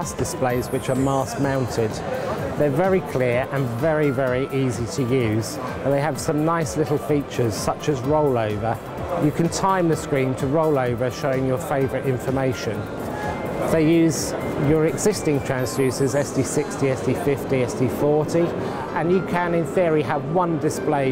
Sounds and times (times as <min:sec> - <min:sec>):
Speech: 0:00.0 - 0:12.8, 0:13.7 - 0:21.1
Music: 0:00.0 - 0:21.1.